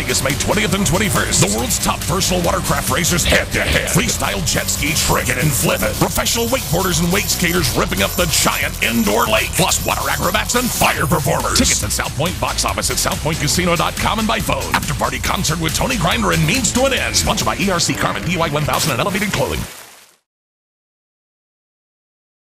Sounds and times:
Music: 0.0 - 19.7
Speech: 0.0 - 19.7.

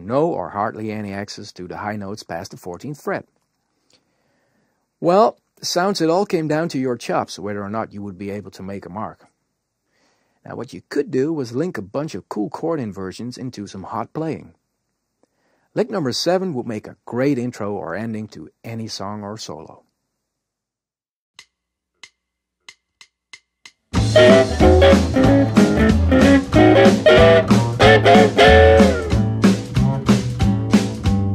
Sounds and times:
Narration, monologue: 0.0 - 20.2.

